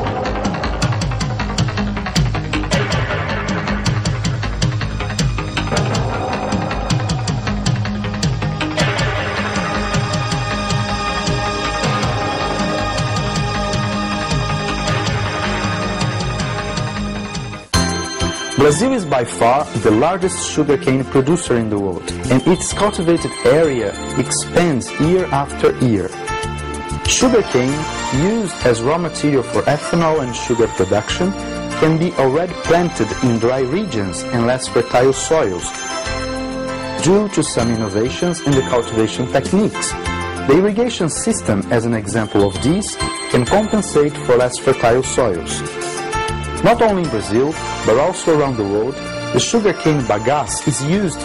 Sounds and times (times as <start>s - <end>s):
Music: 0.0s - 51.2s
Speech: 18.6s - 26.2s, 27.1s - 35.7s, 37.0s - 45.7s, 46.6s - 51.2s.